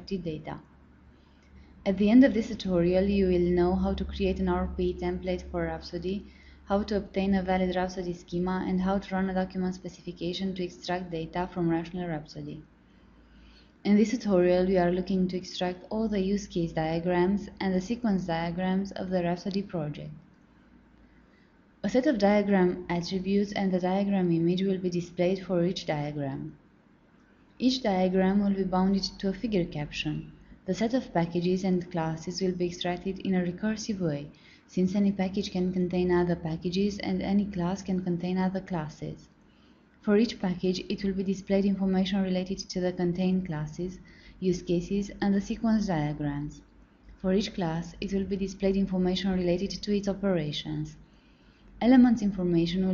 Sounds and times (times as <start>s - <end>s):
Speech: 0.0s - 0.6s, 1.9s - 12.7s, 13.8s - 20.2s, 21.8s - 26.6s, 27.6s - 39.3s, 40.0s - 46.6s, 47.2s - 51.0s, 51.8s - 52.9s.